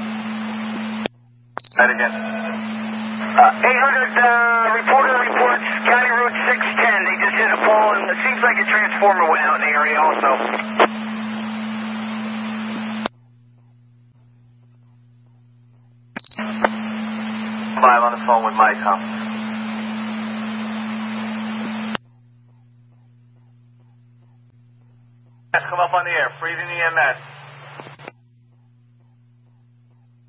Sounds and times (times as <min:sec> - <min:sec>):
Radio: 0:00.0 - 0:01.1, 0:01.7 - 0:13.2, 0:16.2 - 0:22.0, 0:25.5 - 0:28.2
Speech: 0:01.8 - 0:02.6, 0:03.3 - 0:10.6, 0:17.8 - 0:19.2, 0:25.6 - 0:27.3.